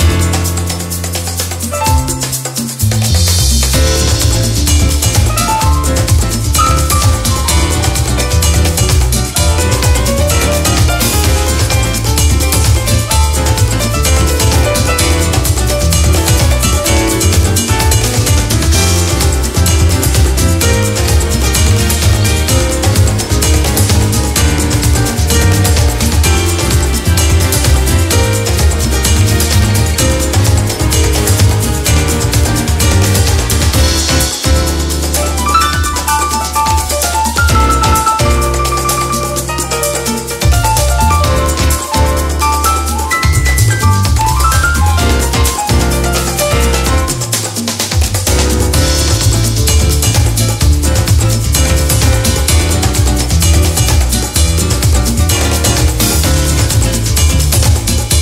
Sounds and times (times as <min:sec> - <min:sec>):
Music: 0:00.0 - 0:58.2.